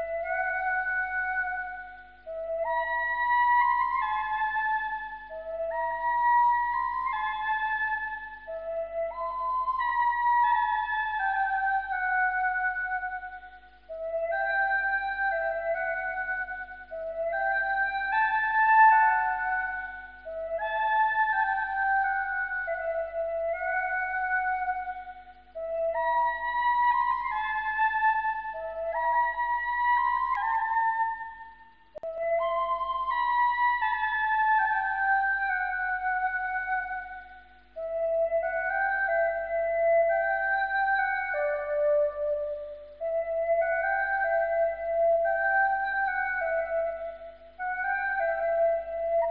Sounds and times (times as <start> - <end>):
Flute: 0.0 - 49.3.